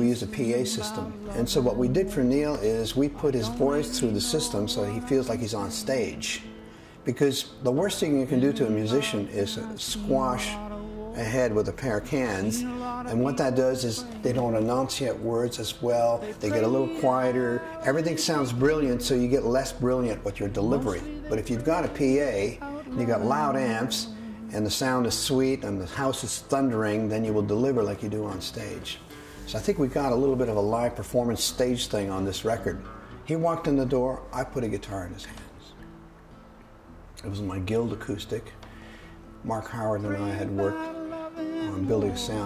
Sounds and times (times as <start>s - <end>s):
Speech: 0.0s - 6.4s, 7.1s - 35.8s, 37.2s - 38.6s, 39.4s - 41.0s, 41.6s - 42.4s
Music: 0.0s - 42.4s.